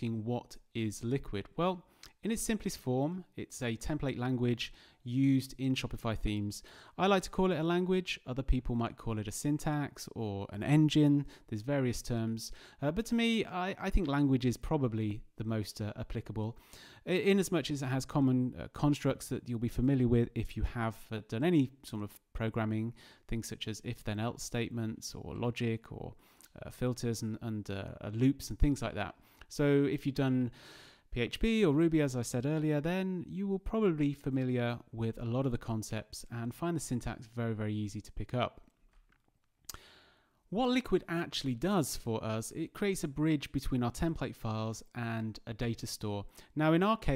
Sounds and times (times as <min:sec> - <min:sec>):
Speech: 0:00.0 - 0:38.6, 0:40.6 - 0:47.1.